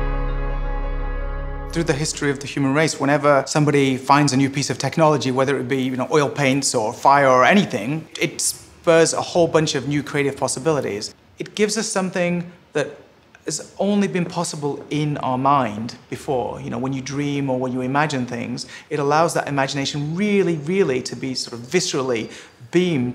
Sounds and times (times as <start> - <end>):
Speech: 1.7 - 23.1.